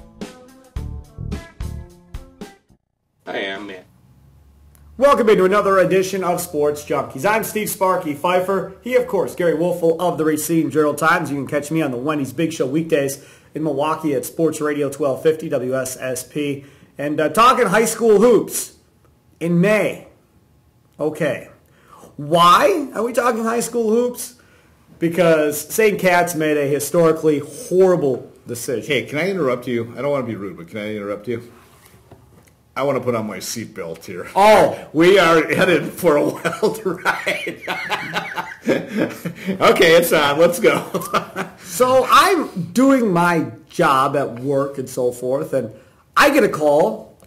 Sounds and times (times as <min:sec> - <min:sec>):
Speech: 0:03.3 - 0:03.9, 0:05.0 - 0:18.8, 0:21.0 - 0:21.6, 0:22.2 - 0:24.4, 0:25.0 - 0:31.5, 0:32.8 - 0:36.8, 0:39.6 - 0:41.0, 0:41.7 - 0:47.2.